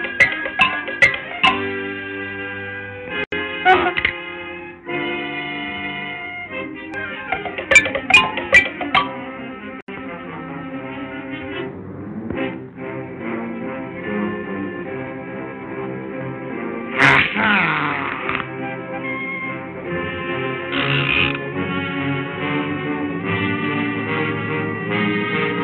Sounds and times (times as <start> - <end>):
Music: 0.0 - 25.6.